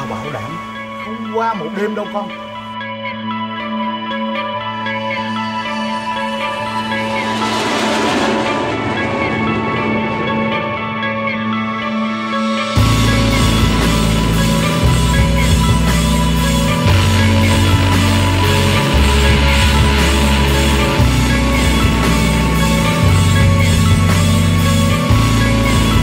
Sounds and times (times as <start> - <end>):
Music: 0.0 - 26.0.